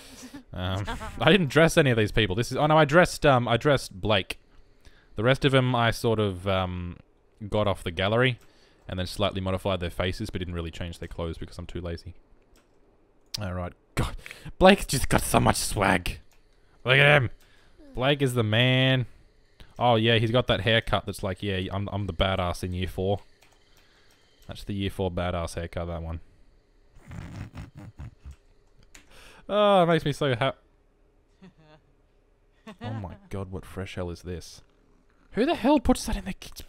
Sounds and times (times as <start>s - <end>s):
Speech: 0.6s - 4.4s, 5.2s - 12.2s, 13.4s - 16.2s, 16.9s - 19.1s, 19.8s - 23.2s, 24.5s - 26.2s, 29.5s - 30.6s, 32.9s - 34.6s, 35.3s - 36.6s.